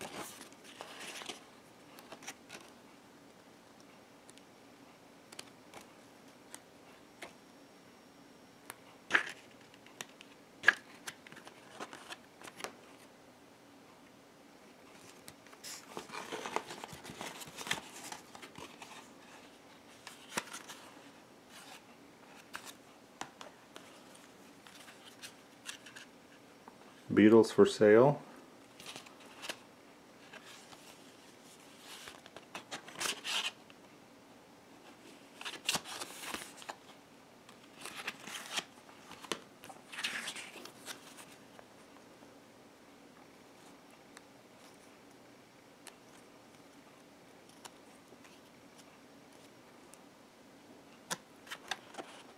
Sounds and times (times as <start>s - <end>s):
Inside, small room: 0.0s - 52.3s.